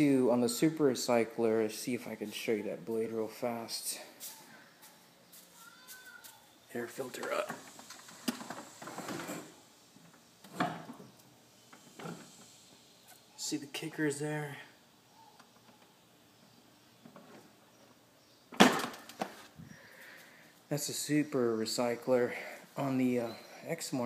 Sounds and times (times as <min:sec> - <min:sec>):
Speech: 0:00.0 - 0:04.6, 0:05.6 - 0:07.6, 0:13.4 - 0:14.8, 0:20.7 - 0:24.0.